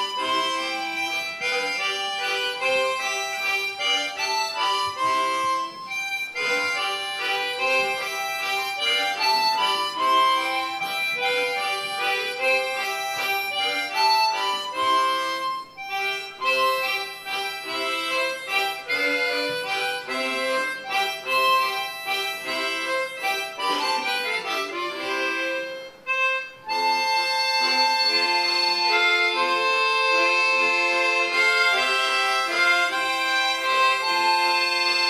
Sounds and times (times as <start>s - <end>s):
Harmonica: 0.0s - 35.1s.